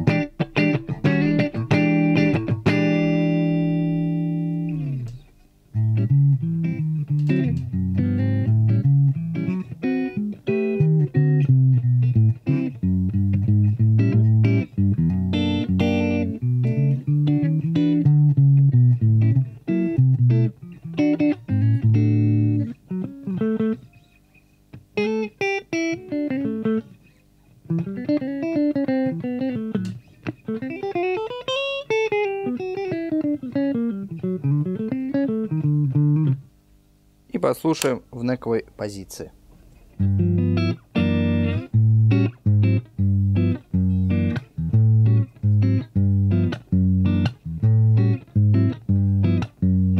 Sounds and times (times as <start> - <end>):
Electric guitar: 0.0 - 36.7, 39.5 - 50.0.